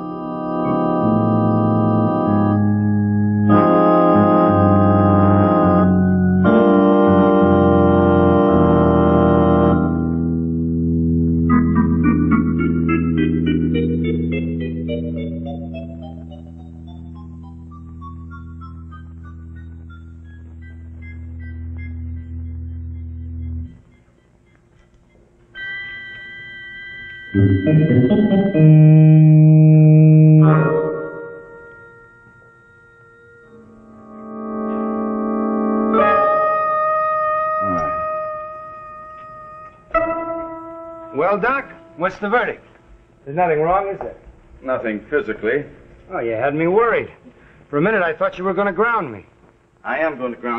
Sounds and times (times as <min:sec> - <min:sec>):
Hammond organ: 0:00.0 - 0:48.7.